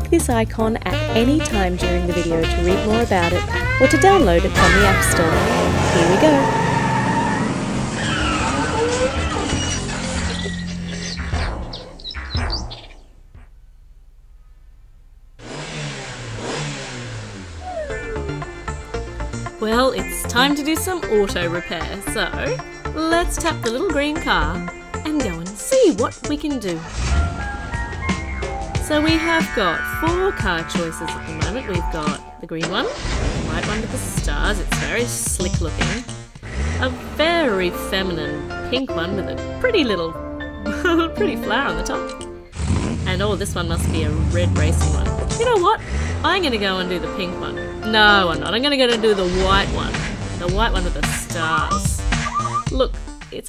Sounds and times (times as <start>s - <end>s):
Car: 3.0s - 10.4s, 15.1s - 19.6s, 26.8s - 31.3s, 33.0s - 39.6s, 42.5s - 52.3s.